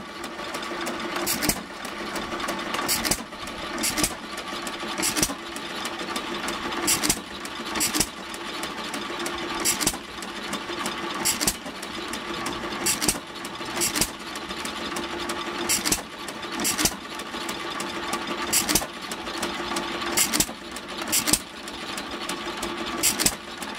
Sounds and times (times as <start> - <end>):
Engine: 0.0 - 23.7.